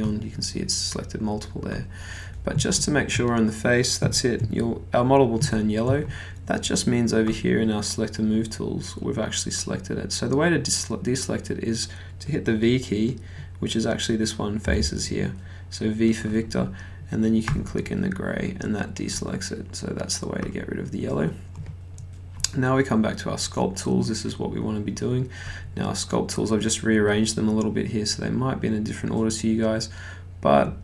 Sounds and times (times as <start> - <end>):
Speech: 0.0 - 21.4, 22.4 - 30.8.